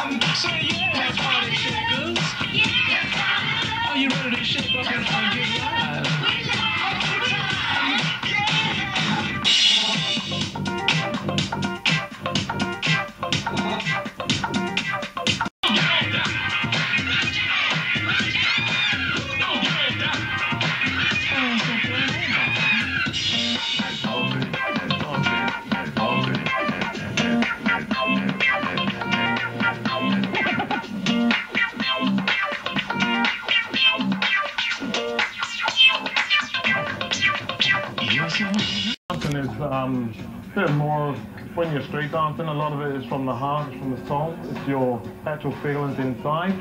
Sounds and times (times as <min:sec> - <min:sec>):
Scratching (performance technique): 0:00.0 - 0:39.4.